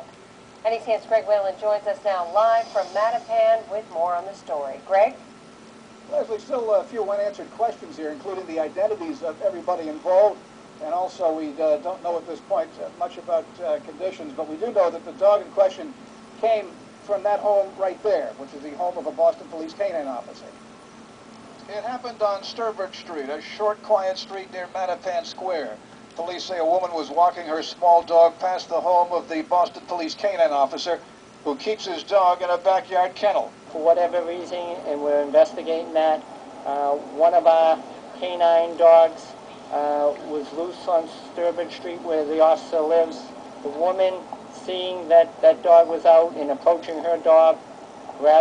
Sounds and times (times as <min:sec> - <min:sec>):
Speech: 0:00.7 - 0:05.2, 0:06.1 - 0:20.6, 0:21.6 - 0:47.6, 0:48.2 - 0:48.4.